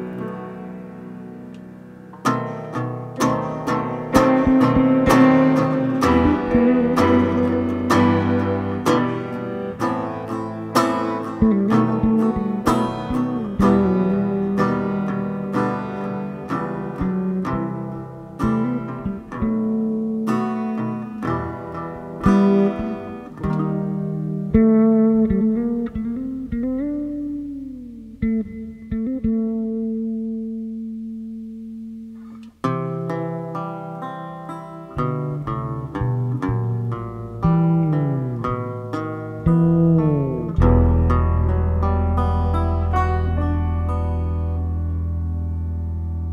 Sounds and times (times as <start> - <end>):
Bass guitar: 0.0 - 46.3
Electronic tuner: 0.0 - 46.3.